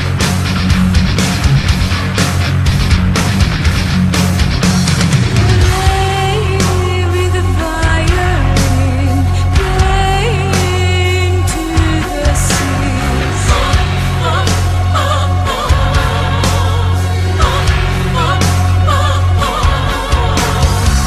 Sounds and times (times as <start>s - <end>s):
Music: 0.0s - 21.0s.